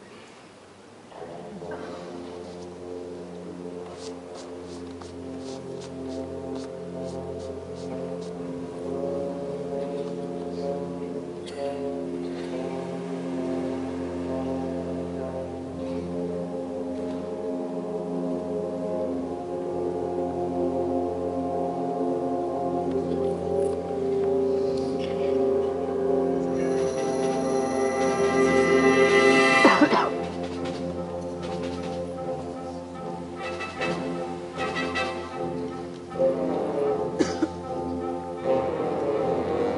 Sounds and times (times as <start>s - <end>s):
Orchestra: 1.1s - 39.7s.